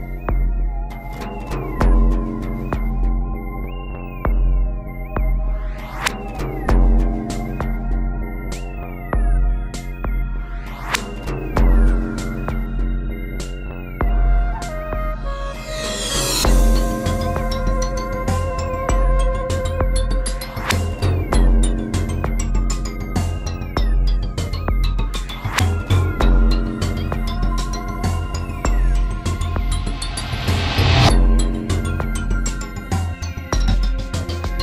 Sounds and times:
Electronic music: 0.0 - 34.6.

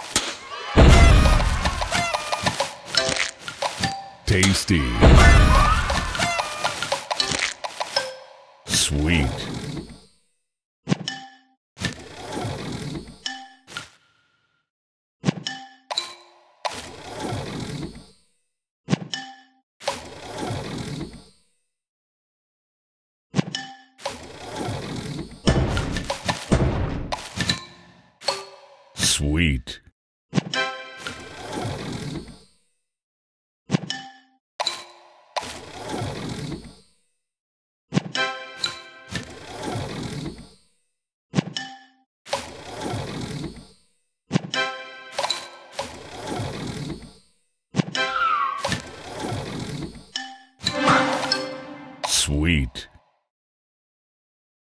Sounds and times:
Speech: 4.3 - 5.1, 8.7 - 9.5, 29.0 - 29.9, 52.0 - 53.0.

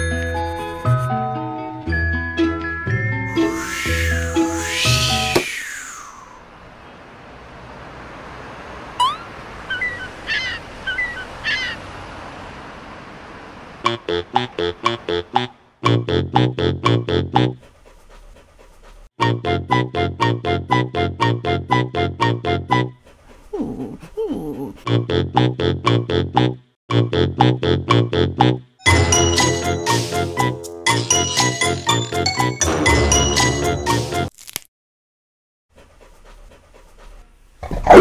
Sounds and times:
Music: 0.0 - 5.4, 19.2 - 23.0, 26.9 - 34.3.

